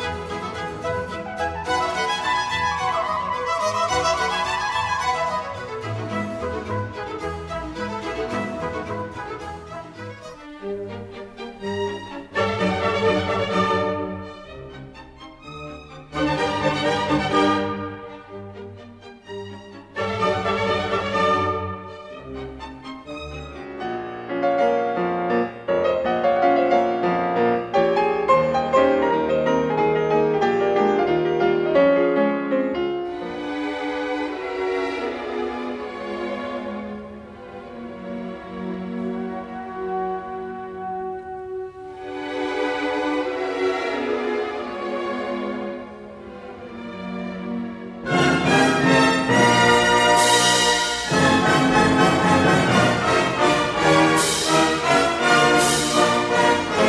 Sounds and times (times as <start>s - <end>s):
Classical music: 0.0s - 56.8s.